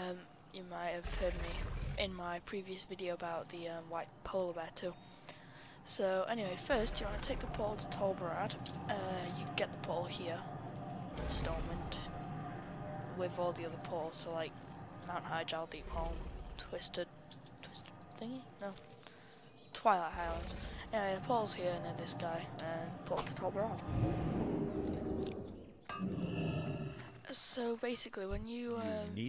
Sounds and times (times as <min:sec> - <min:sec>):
Speech: 0:00.0 - 0:05.0, 0:05.9 - 0:10.5, 0:11.2 - 0:12.1, 0:13.2 - 0:18.8, 0:19.7 - 0:23.9, 0:27.2 - 0:29.2.